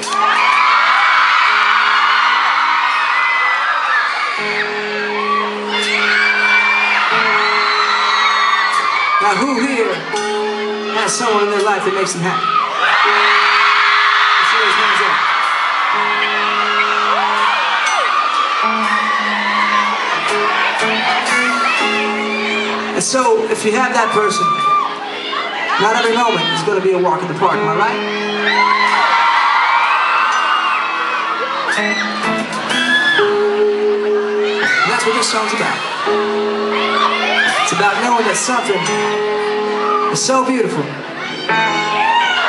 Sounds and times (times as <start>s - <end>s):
Music: 0.0s - 42.4s.